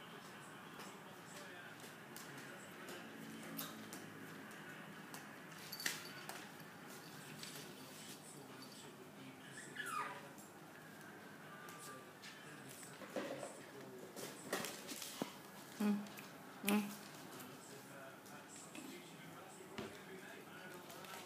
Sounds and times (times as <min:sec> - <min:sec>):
Whimper (dog): 0:09.5 - 0:10.3.